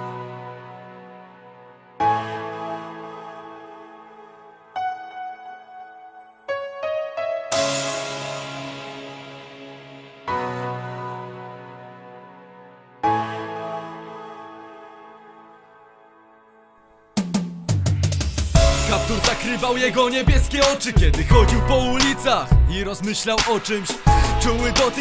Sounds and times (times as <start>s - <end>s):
Music: 0.0s - 25.0s.